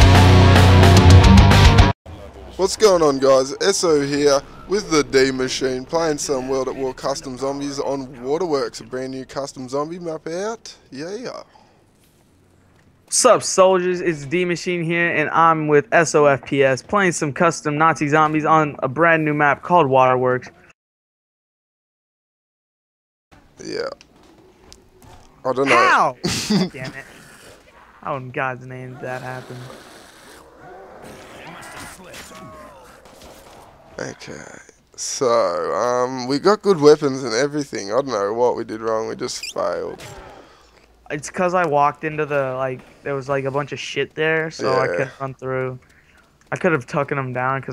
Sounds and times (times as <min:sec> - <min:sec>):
Speech: 0:02.2 - 0:11.4, 0:23.6 - 0:24.0, 0:25.5 - 0:27.1, 0:34.0 - 0:40.1, 0:41.1 - 0:45.8.